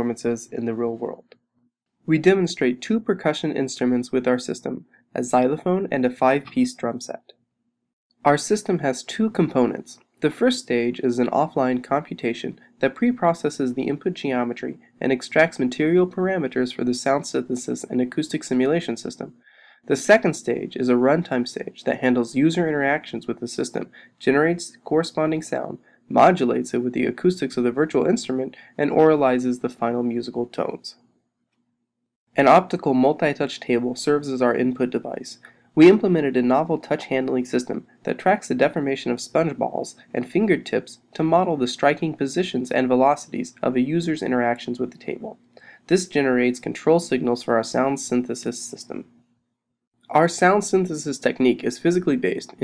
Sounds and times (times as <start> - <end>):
Speech: 0.0 - 1.3, 2.1 - 7.3, 8.3 - 31.0, 32.4 - 49.1, 50.1 - 52.6.